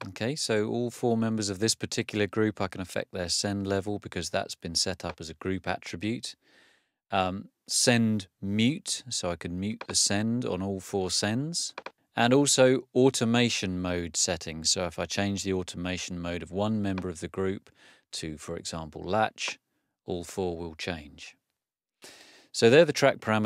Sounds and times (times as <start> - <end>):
Speech: 0.0 - 6.4, 7.1 - 21.4, 22.5 - 23.4.